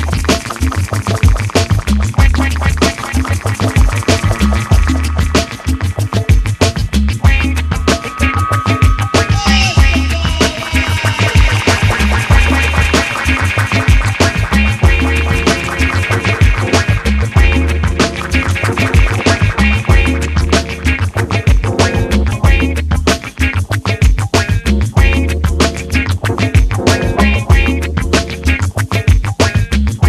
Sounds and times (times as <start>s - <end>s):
Music: 0.0s - 30.0s.